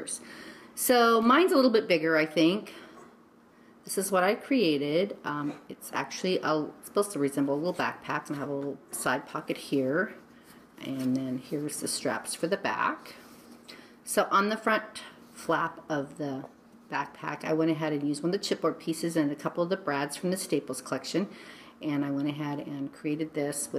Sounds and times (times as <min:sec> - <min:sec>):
Speech: 0:00.8 - 0:02.7, 0:03.9 - 0:10.2, 0:10.8 - 0:13.2, 0:14.1 - 0:23.7.